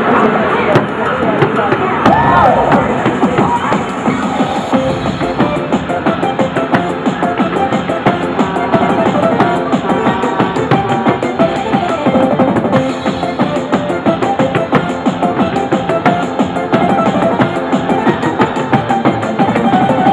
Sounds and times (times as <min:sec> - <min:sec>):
Music: 0:00.0 - 0:20.1.